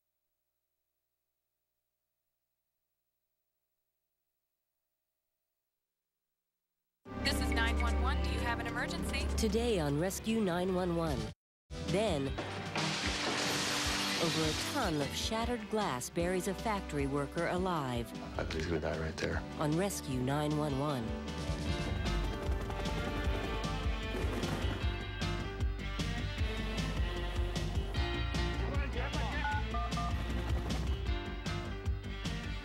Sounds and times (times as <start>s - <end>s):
Music: 7.1s - 32.6s
Speech: 7.2s - 11.3s, 11.9s - 12.4s, 14.2s - 21.1s.